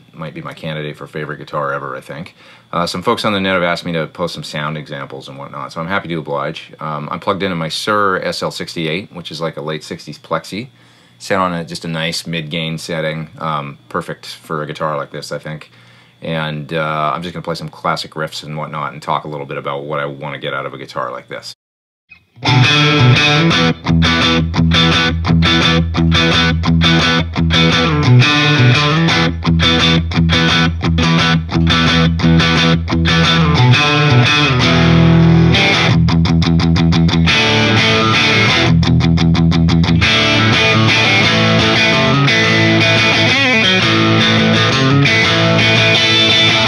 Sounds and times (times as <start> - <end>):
Speech: 0.2 - 21.6
Guitar: 22.1 - 46.6.